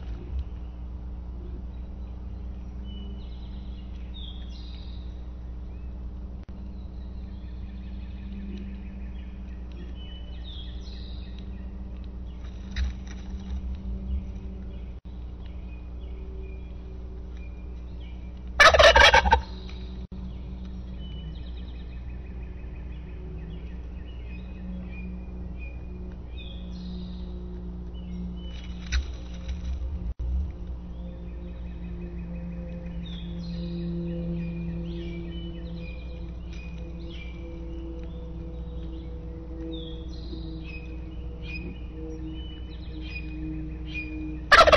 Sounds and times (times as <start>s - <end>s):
Bird: 6.6s - 29.8s, 30.9s - 44.7s.